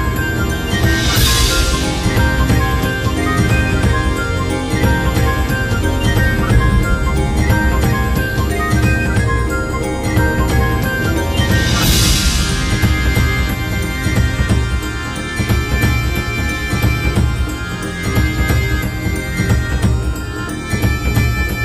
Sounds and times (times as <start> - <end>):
Music: 0.0 - 21.6.